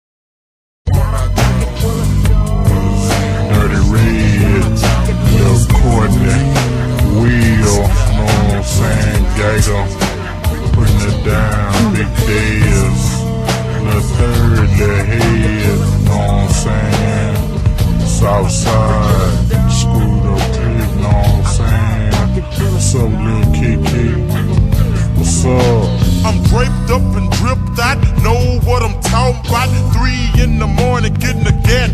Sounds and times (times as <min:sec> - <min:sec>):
Music: 0:00.8 - 0:31.9.